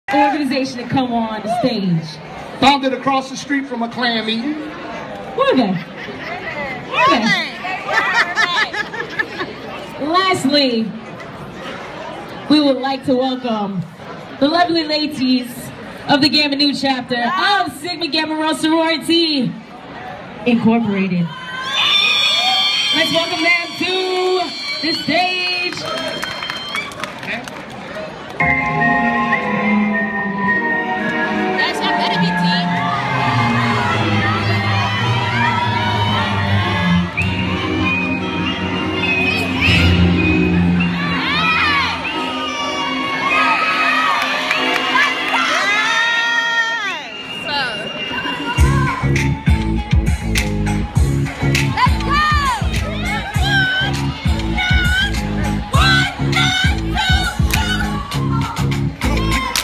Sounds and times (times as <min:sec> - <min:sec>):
Hubbub, speech noise, speech babble: 0:00.0 - 0:59.6
Outside, urban or manmade: 0:00.0 - 0:59.6.